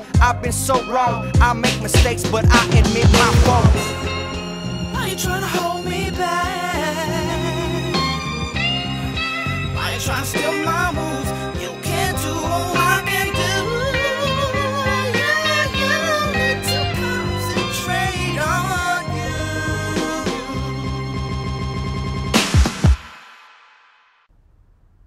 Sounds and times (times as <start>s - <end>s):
Music: 0.0s - 23.9s.